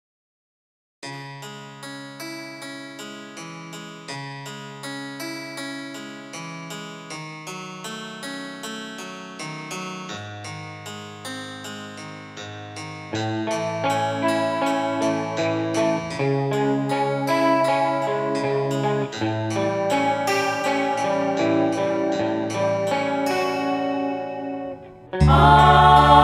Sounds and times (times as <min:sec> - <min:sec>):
Piano: 0:01.0 - 0:26.2.